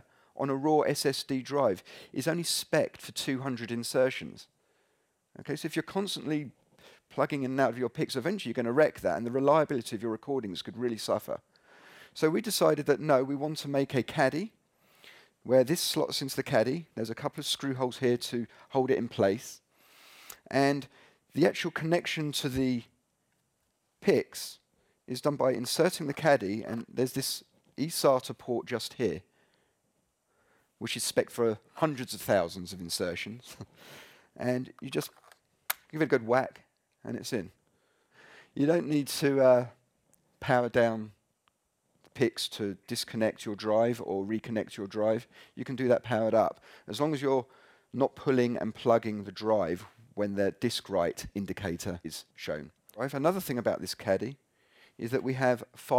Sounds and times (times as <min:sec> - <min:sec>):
Speech: 0:00.0 - 0:04.5, 0:05.4 - 0:11.5, 0:12.2 - 0:14.6, 0:15.4 - 0:19.6, 0:20.4 - 0:22.9, 0:24.0 - 0:29.3, 0:30.8 - 0:33.7, 0:34.4 - 0:35.2, 0:35.9 - 0:37.6, 0:38.6 - 0:39.8, 0:40.4 - 0:41.2, 0:42.1 - 0:54.4, 0:55.0 - 0:55.9.